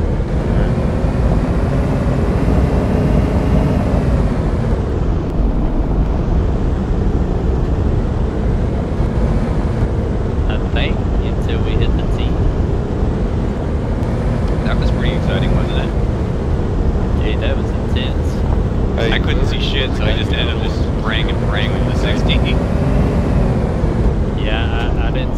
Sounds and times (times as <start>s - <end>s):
Speech: 10.5s - 12.4s, 14.6s - 16.0s, 17.2s - 18.4s, 19.0s - 22.6s, 24.4s - 25.3s.